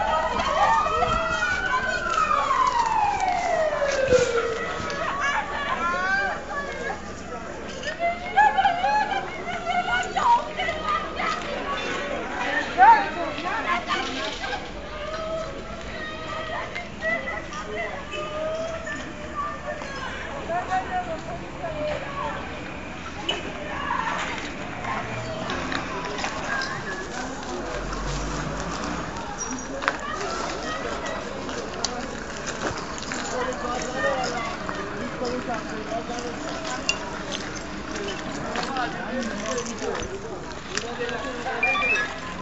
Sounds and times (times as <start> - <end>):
Speech: 0.0 - 42.4.